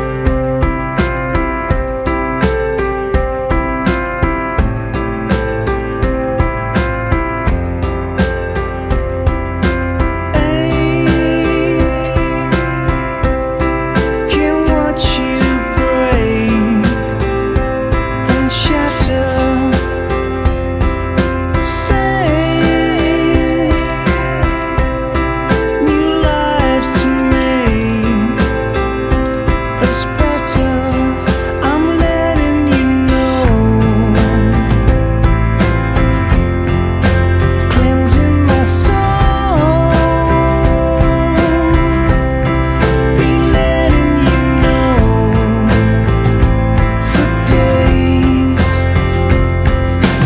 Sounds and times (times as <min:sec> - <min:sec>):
Music: 0:00.0 - 0:50.2.